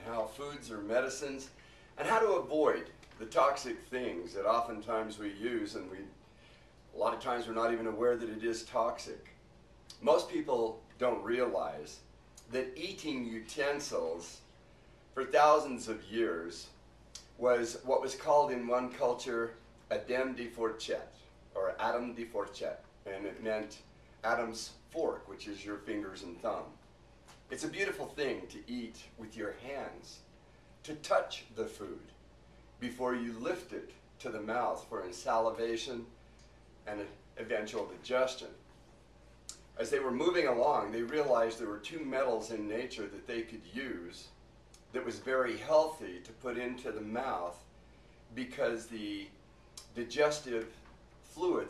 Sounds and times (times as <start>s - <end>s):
Speech: 0.0s - 6.2s, 6.9s - 14.5s, 15.1s - 26.8s, 27.5s - 32.2s, 32.8s - 36.2s, 36.8s - 38.7s, 39.8s - 47.7s, 48.3s - 51.6s.